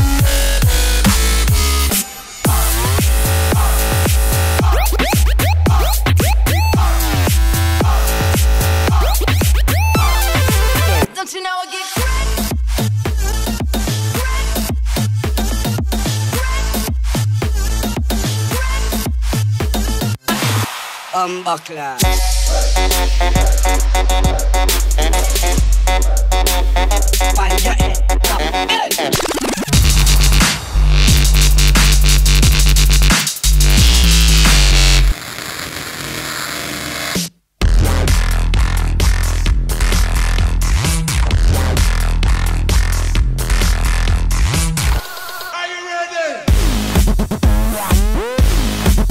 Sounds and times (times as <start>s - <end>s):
Music: 0.0s - 45.7s, 46.5s - 49.1s.